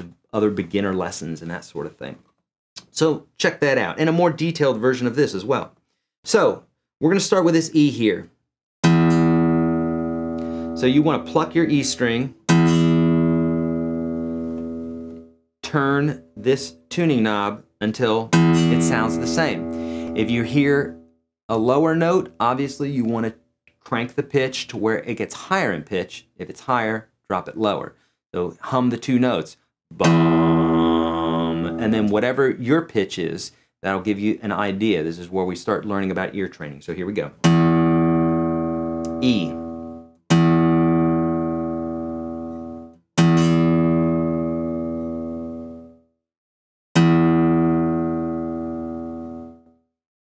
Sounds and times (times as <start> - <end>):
Acoustic guitar: 8.8 - 15.3, 18.4 - 21.0, 30.0 - 32.2, 37.4 - 45.9, 47.0 - 49.7
Electronic tuner: 8.8 - 15.4, 18.3 - 21.1, 30.0 - 32.1, 37.4 - 46.1, 47.0 - 49.8.